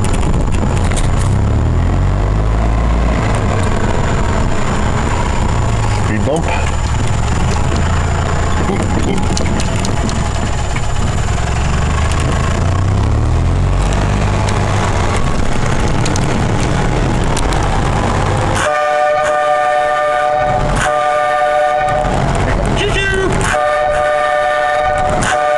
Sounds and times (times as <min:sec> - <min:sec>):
Train: 0:00.0 - 0:25.5.